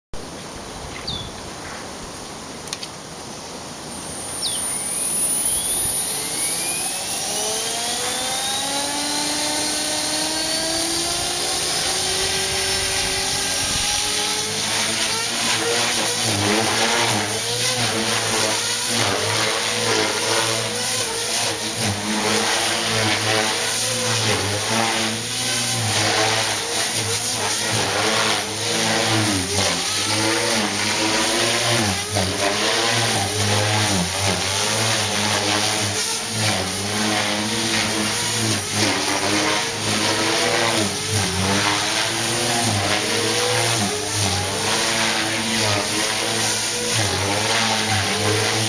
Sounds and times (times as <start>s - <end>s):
Jet engine: 3.7s - 48.6s.